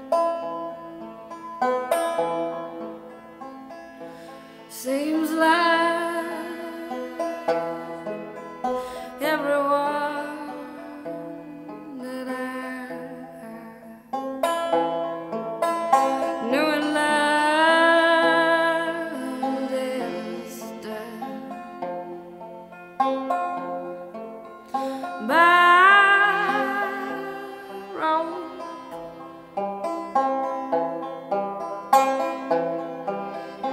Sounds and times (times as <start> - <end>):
Music: 0.0 - 33.7.